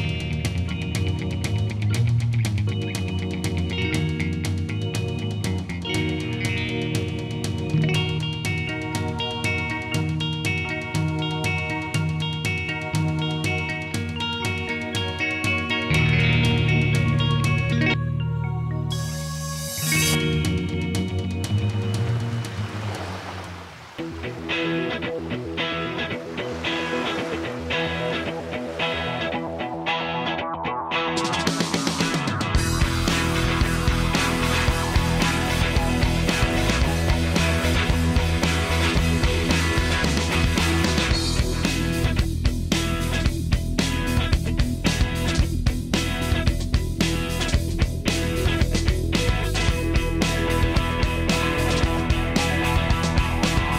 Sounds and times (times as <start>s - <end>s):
Music: 0.0s - 53.7s.